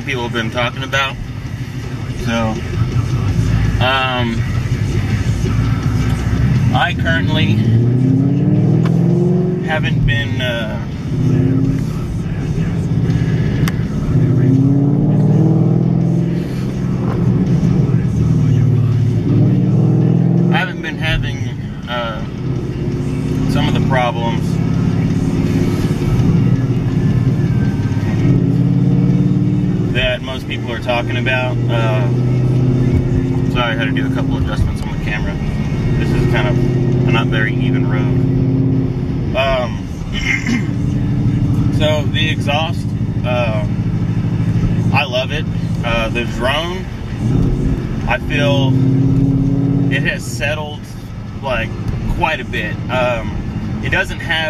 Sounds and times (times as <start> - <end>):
Speech: 0.0 - 1.2, 2.2 - 2.7, 3.7 - 4.6, 6.7 - 7.6, 9.7 - 10.9, 20.5 - 22.3, 23.5 - 24.5, 30.0 - 32.1, 33.4 - 35.4, 36.0 - 38.2, 39.4 - 40.7, 41.7 - 43.7, 44.9 - 46.9, 48.1 - 48.8, 49.9 - 54.4
Car: 0.0 - 54.4
Music: 0.0 - 54.4.